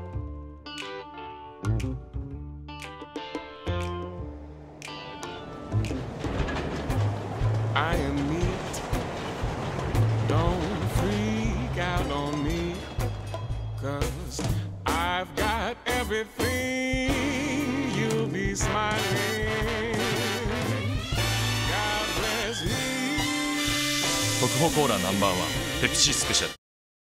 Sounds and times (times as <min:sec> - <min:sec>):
Music: 0:00.0 - 0:26.6
Speech: 0:24.4 - 0:26.6.